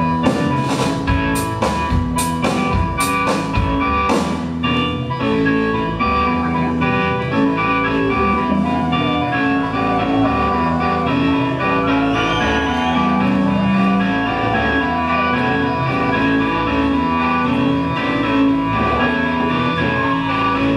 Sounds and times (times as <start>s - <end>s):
Independent music: 0.0s - 20.7s.